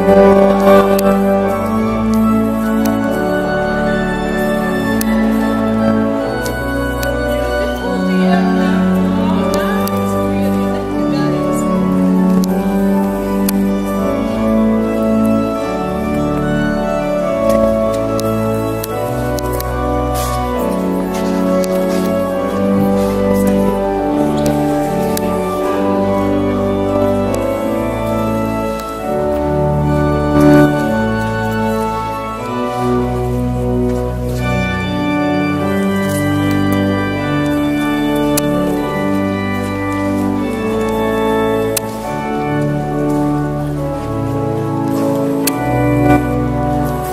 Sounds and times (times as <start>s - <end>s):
Music: 0.0s - 47.1s
Walk, footsteps: 17.4s - 35.0s, 35.6s - 47.1s.